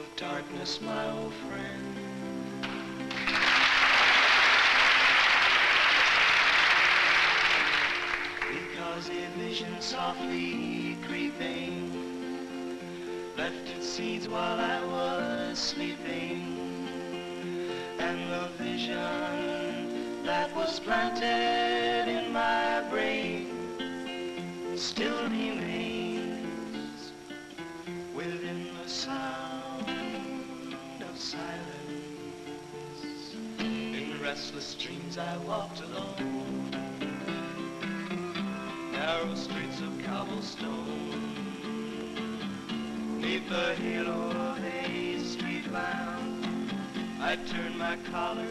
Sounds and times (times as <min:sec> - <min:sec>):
Music: 0:00.0 - 0:48.5.